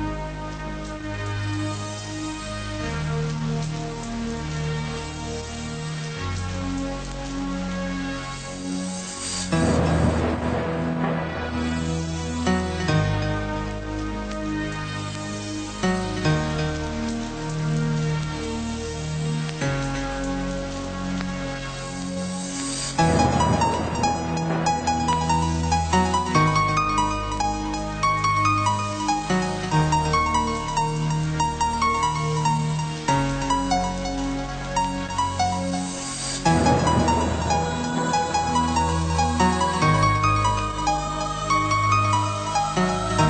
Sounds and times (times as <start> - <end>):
Music: 0.0 - 43.2.